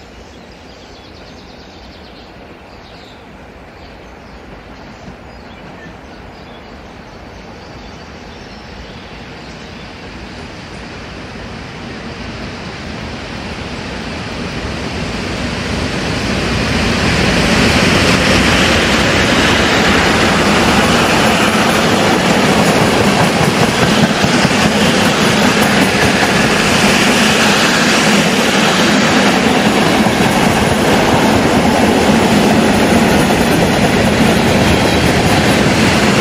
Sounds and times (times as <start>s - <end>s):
Railroad car, train wagon: 0.0s - 36.2s
Train: 0.0s - 36.2s.